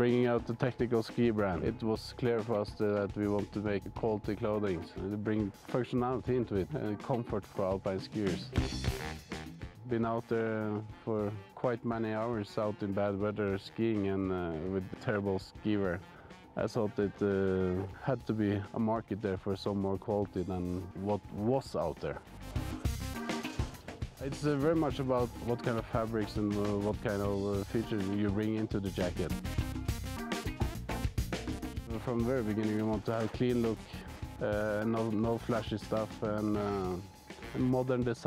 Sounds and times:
Speech: 0.0s - 8.6s, 9.9s - 16.0s, 16.6s - 22.2s, 24.2s - 29.4s, 31.9s - 37.0s, 37.6s - 38.2s
Music: 0.0s - 38.2s.

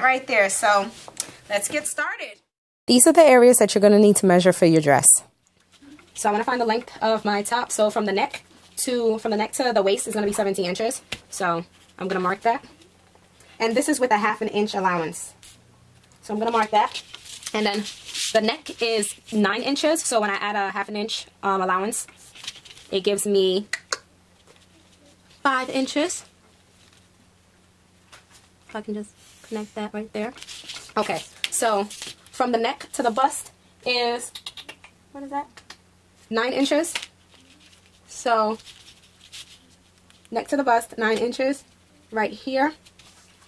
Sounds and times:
Speech: 0.0s - 5.3s.

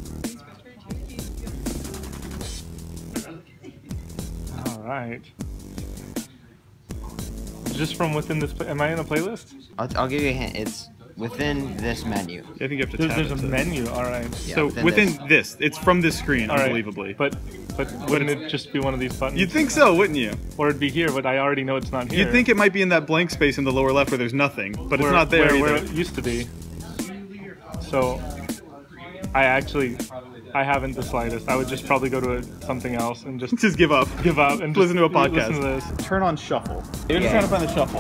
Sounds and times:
Music: 0.0s - 38.0s
Speech: 7.1s - 38.0s.

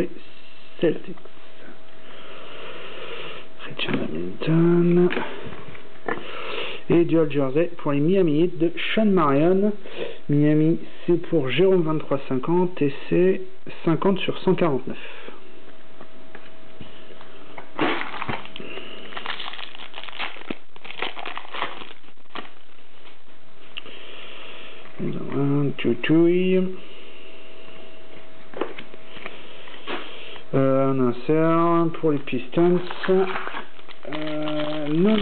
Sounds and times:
Speech: 0.0s - 0.2s, 0.8s - 1.2s, 3.6s - 5.4s, 6.9s - 15.0s, 25.0s - 26.8s, 30.5s - 33.5s, 34.1s - 35.2s
Inside, small room: 0.0s - 35.2s.

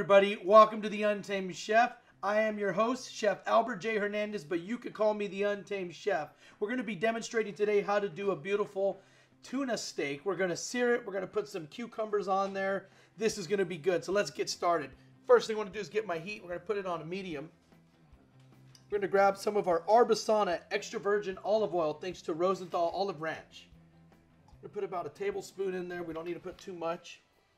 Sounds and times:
Speech: 0.0s - 17.5s, 18.9s - 23.7s, 24.6s - 27.3s
Music: 0.0s - 27.5s.

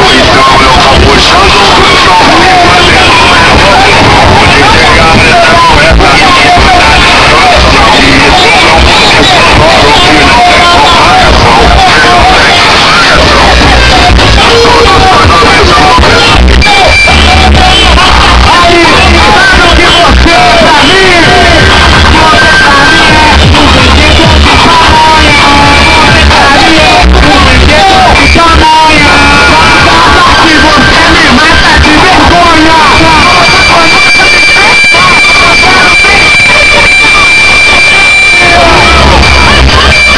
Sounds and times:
Music: 0.0s - 40.1s
Speech: 0.0s - 40.1s.

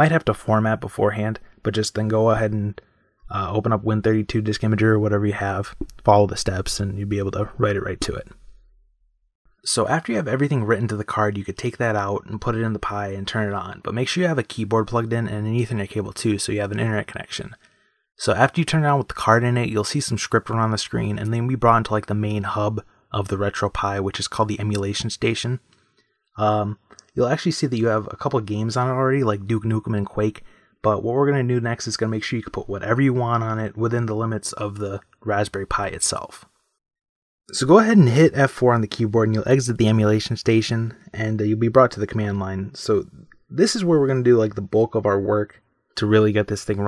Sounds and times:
Speech: 0.0s - 8.4s, 9.6s - 17.6s, 18.2s - 25.7s, 26.4s - 36.5s, 37.5s - 46.8s
Inside, small room: 0.0s - 36.8s, 37.5s - 46.8s.

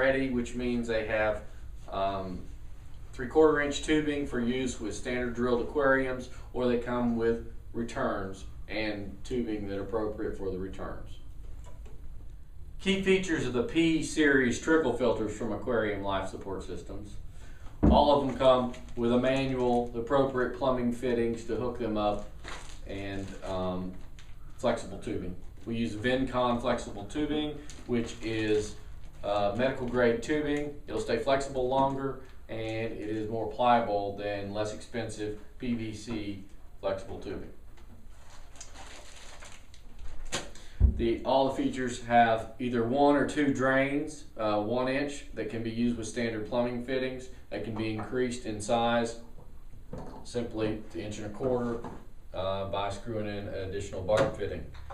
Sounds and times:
Speech: 0.0s - 2.5s, 3.1s - 11.2s, 12.8s - 17.2s, 17.8s - 24.0s, 24.6s - 37.6s, 41.0s - 49.3s, 50.1s - 54.8s.

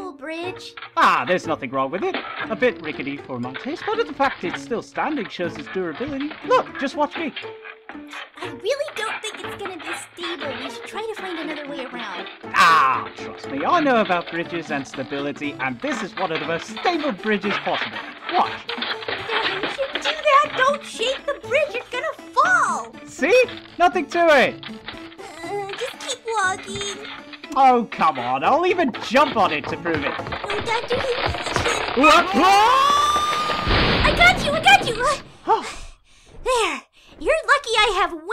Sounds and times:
Music: 0.0s - 35.8s.

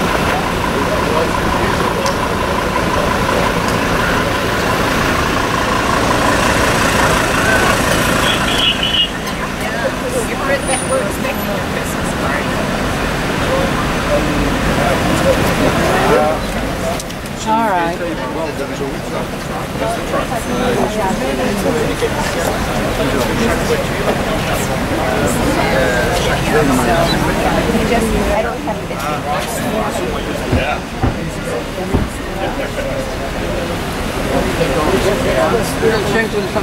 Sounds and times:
Hubbub, speech noise, speech babble: 0.0s - 36.6s
Speech: 0.0s - 36.6s.

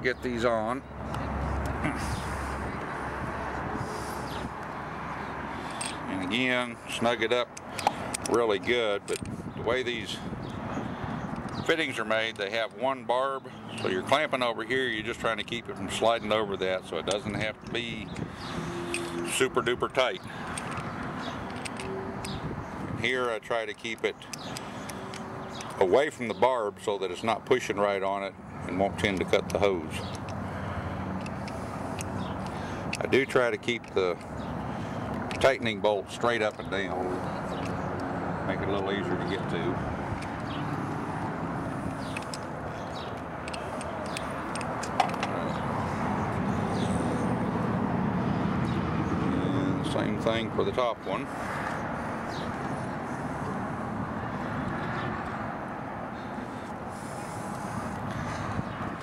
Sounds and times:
Speech: 0.0s - 0.8s, 6.1s - 7.5s, 8.3s - 10.2s, 11.7s - 18.1s, 19.3s - 20.2s, 23.0s - 24.2s, 25.8s - 30.0s, 33.0s - 34.2s, 35.4s - 37.2s, 38.5s - 39.8s, 49.4s - 51.3s.

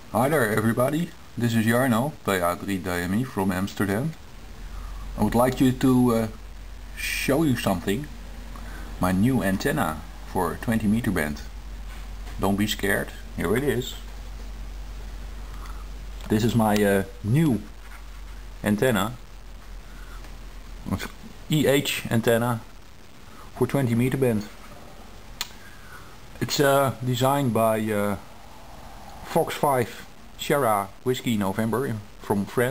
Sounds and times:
Inside, small room: 0.0s - 32.7s
Speech: 0.1s - 4.2s, 5.2s - 6.4s, 7.0s - 8.2s, 9.0s - 11.6s, 12.4s - 14.1s, 16.2s - 17.8s, 18.6s - 19.3s, 20.8s - 22.7s, 23.6s - 24.6s, 26.4s - 28.3s, 29.2s - 32.7s.

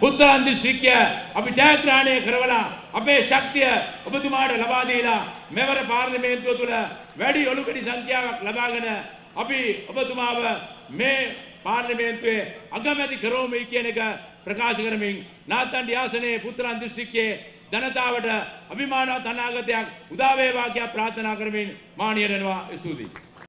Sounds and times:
Male speech, man speaking: 0.0s - 23.2s.

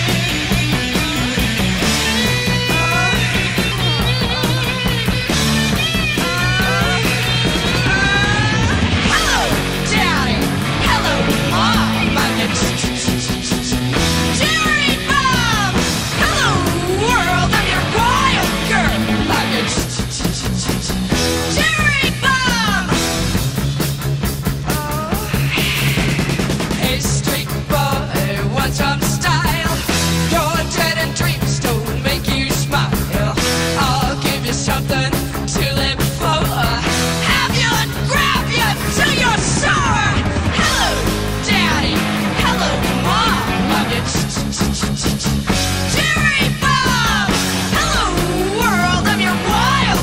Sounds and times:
Psychedelic rock: 0.0s - 50.0s.

